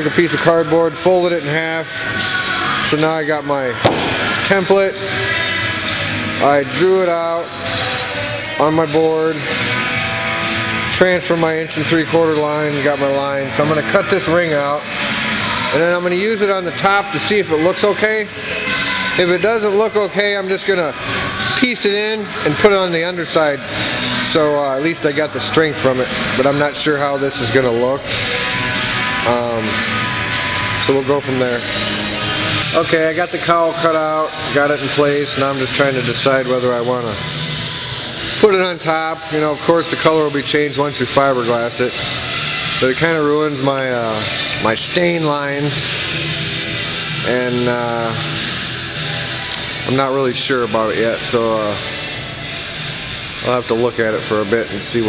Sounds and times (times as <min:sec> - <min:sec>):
Music: 0:00.0 - 0:55.0
Speech: 0:02.9 - 0:03.8, 0:04.4 - 0:05.0, 0:06.4 - 0:07.5, 0:10.9 - 0:14.9, 0:15.7 - 0:18.3, 0:19.2 - 0:20.9, 0:21.6 - 0:23.6, 0:24.3 - 0:28.1, 0:29.3 - 0:29.8, 0:30.8 - 0:31.6, 0:32.8 - 0:37.2, 0:38.4 - 0:41.9, 0:42.8 - 0:45.9, 0:47.3 - 0:48.2, 0:49.9 - 0:51.9, 0:53.4 - 0:55.0.